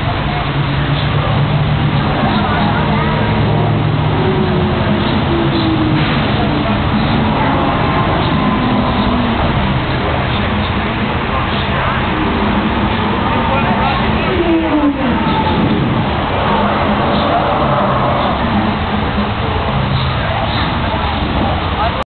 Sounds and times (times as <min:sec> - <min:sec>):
Speech: 0:00.0 - 0:08.2, 0:09.4 - 0:22.0.